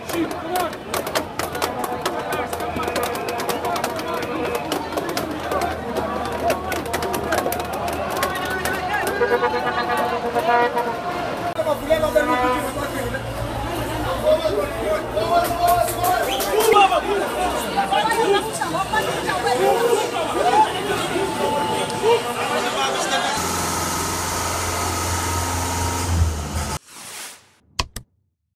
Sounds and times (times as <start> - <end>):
Speech: 0.0 - 23.4.